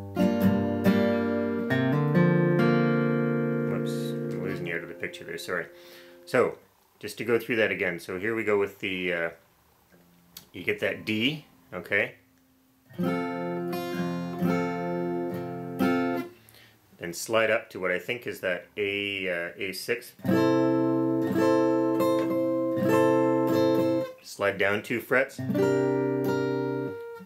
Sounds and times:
Strum: 0.0 - 6.4, 12.9 - 16.6, 20.2 - 24.2, 25.4 - 27.2
Acoustic guitar: 0.0 - 6.5, 12.2 - 16.8, 18.8 - 27.2
Speech: 3.7 - 5.7, 6.3 - 9.4, 10.5 - 12.2, 17.0 - 20.2, 24.2 - 25.5.

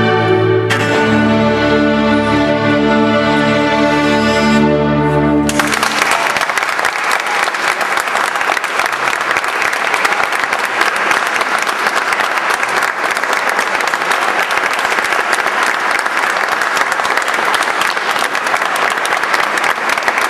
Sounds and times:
Cello: 0.0 - 5.5
Classical music: 0.0 - 6.0
Orchestra: 0.0 - 20.3
Applause: 5.5 - 20.3.

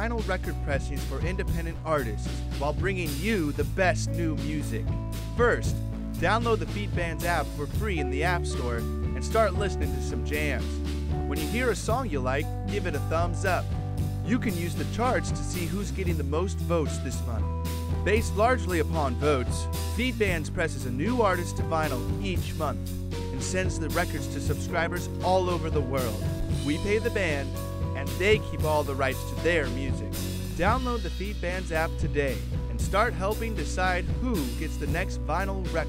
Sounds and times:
Speech: 0.0 - 13.7, 14.3 - 17.4, 18.1 - 35.8
Music: 0.0 - 35.8.

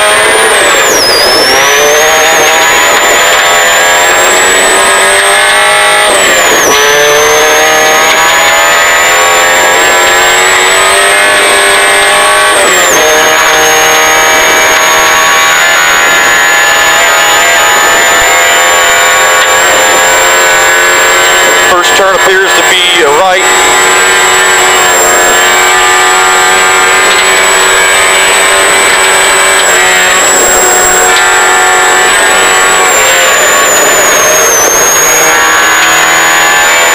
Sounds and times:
Speech: 21.7 - 23.5.

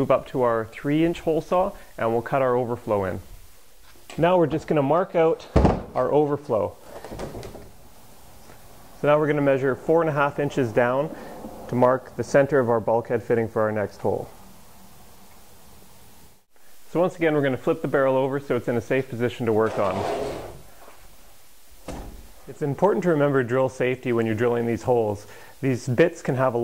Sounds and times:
Speech: 0.0 - 3.3, 4.1 - 6.8, 9.0 - 14.3, 16.9 - 20.2, 22.5 - 26.6.

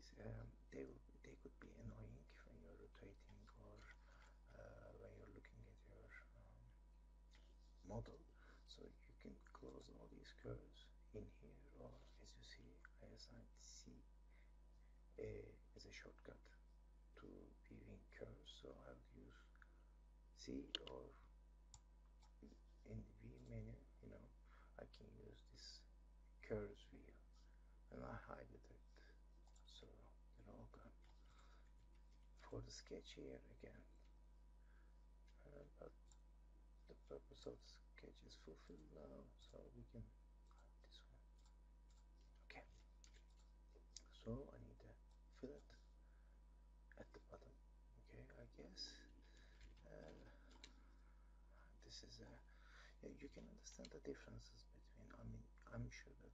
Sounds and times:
Speech: 0.0 - 6.8, 7.8 - 14.1, 15.2 - 16.6, 17.2 - 19.7, 20.4 - 21.3, 22.4 - 27.3, 27.9 - 31.0, 32.4 - 34.0, 35.4 - 36.0, 36.9 - 41.3, 42.5 - 42.8, 43.8 - 45.8, 47.0 - 50.8, 51.6 - 56.3.

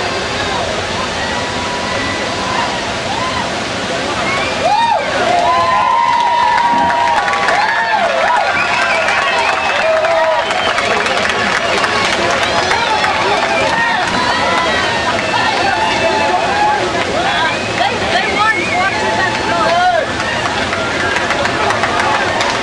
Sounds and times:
Speech: 0.0 - 4.6, 10.7 - 22.6
Waterfall: 0.0 - 22.6.

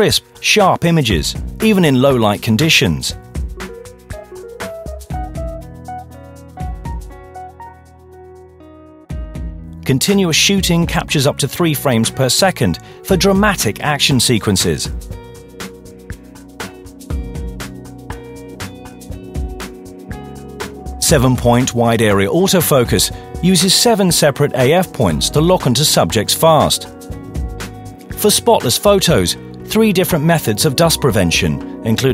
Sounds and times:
Speech: 0.0 - 3.2, 9.8 - 15.0, 21.0 - 26.9, 28.2 - 32.1
Music: 0.0 - 32.1.

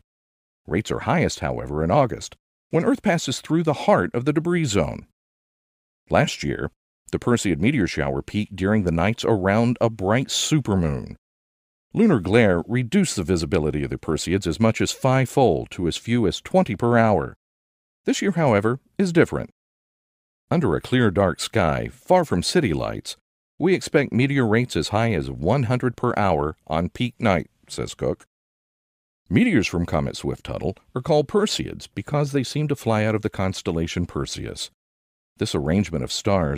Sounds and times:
Speech: 0.7 - 5.1, 6.1 - 11.2, 11.9 - 17.4, 18.1 - 19.6, 20.5 - 28.3, 29.3 - 34.8, 35.4 - 36.5.

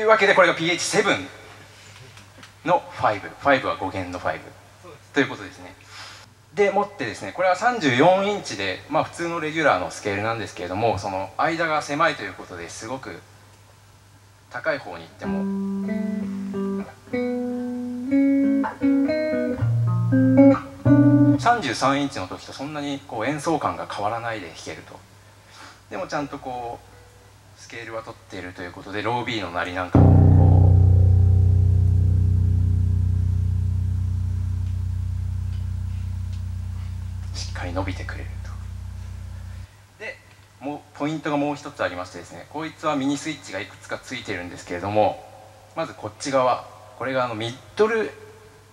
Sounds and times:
Speech: 0.0 - 5.8, 6.5 - 13.3, 14.5 - 15.6, 21.4 - 25.1, 25.9 - 26.9, 27.6 - 30.0, 37.3 - 38.7, 40.0 - 48.3
Bass guitar: 15.3 - 21.7, 29.9 - 39.7.

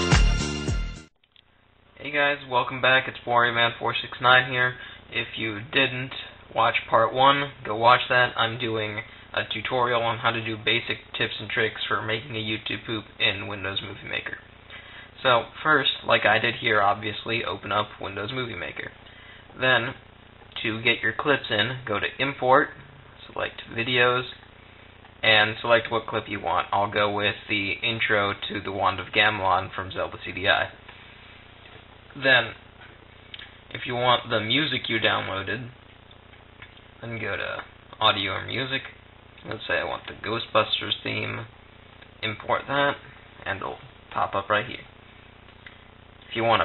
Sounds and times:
Speech: 2.0 - 14.5, 15.2 - 24.5, 25.2 - 30.8, 32.1 - 32.7, 33.7 - 35.8, 37.0 - 41.5, 42.1 - 45.0, 46.3 - 46.6.

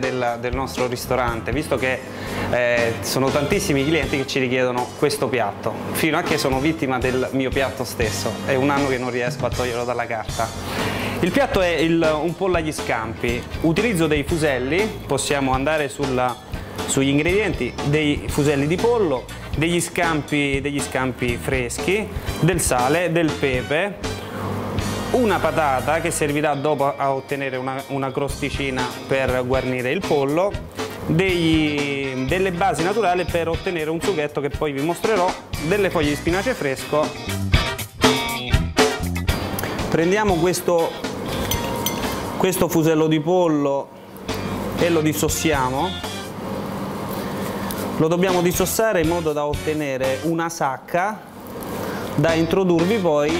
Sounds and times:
Speech: 0.0 - 10.6, 11.2 - 24.0, 25.1 - 37.2, 39.9 - 41.0, 42.4 - 43.9, 44.8 - 46.0, 48.0 - 51.3, 52.2 - 53.4
Music: 0.0 - 53.4.

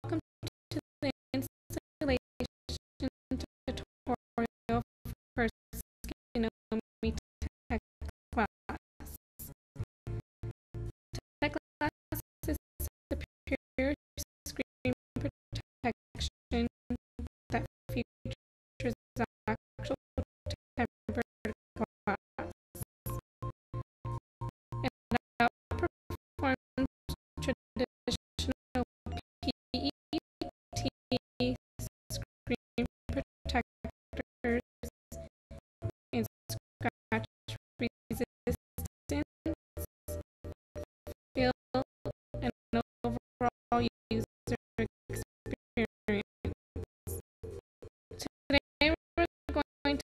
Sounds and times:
Speech: 0.0 - 0.3, 1.0 - 4.8, 6.3 - 8.8, 11.4 - 16.7, 17.5 - 18.1, 18.8 - 20.0, 20.8 - 22.2, 24.8 - 28.9, 32.4 - 34.9, 36.1 - 39.3, 41.4 - 44.9, 45.5 - 46.3, 48.2 - 50.1
Music: 0.0 - 0.6, 1.3 - 50.1.

